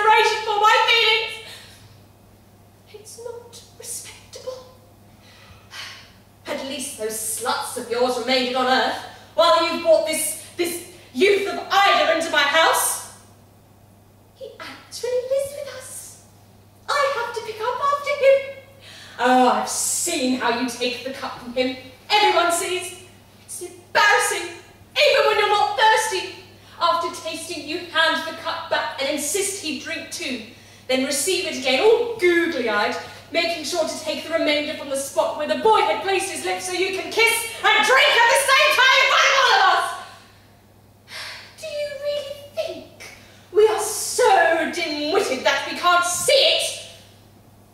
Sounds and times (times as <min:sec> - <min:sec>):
Narration, monologue: 0:00.0 - 0:47.7.